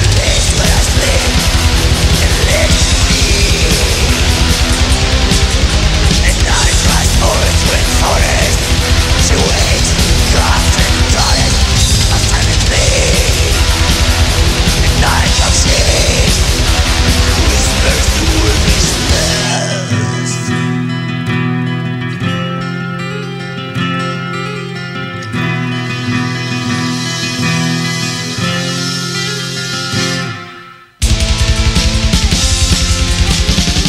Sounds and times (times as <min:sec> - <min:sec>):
Angry music: 0:00.0 - 0:23.4, 0:24.7 - 0:33.8.